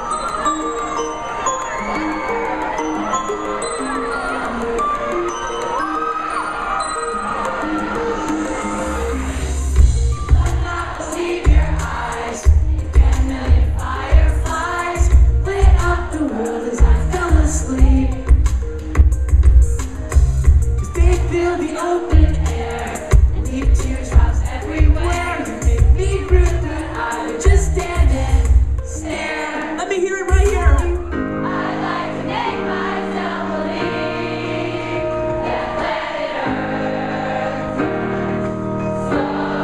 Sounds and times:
Music: 0.0s - 39.6s.

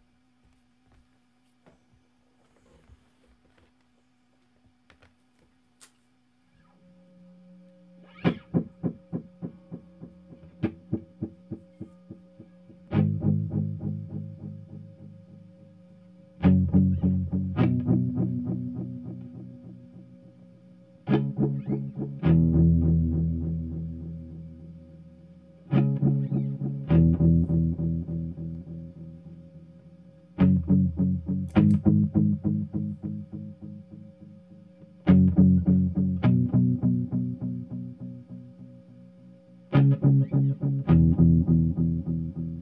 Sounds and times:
Music: 6.5s - 42.6s.

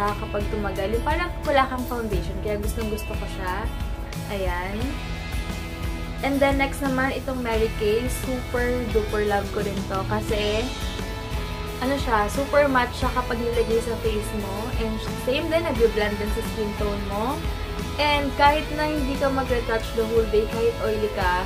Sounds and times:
Speech: 0.0s - 3.7s, 4.3s - 5.0s, 6.2s - 10.8s, 11.8s - 17.4s, 18.0s - 21.4s
Music: 0.0s - 21.4s.

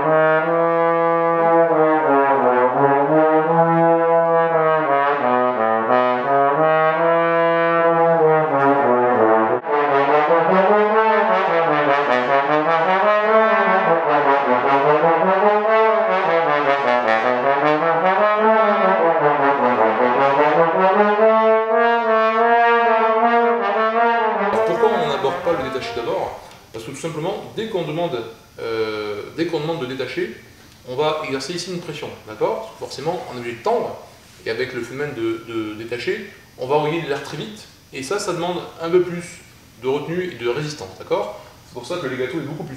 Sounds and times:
Trombone: 0.0s - 26.4s
Speech: 24.6s - 42.7s.

